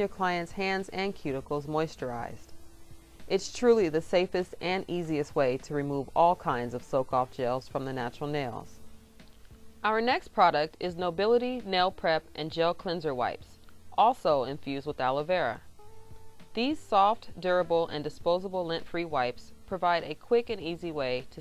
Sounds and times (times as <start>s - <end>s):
Speech: 0.0s - 2.5s, 3.3s - 8.8s, 9.8s - 15.6s, 16.6s - 21.4s
Music: 0.0s - 21.4s.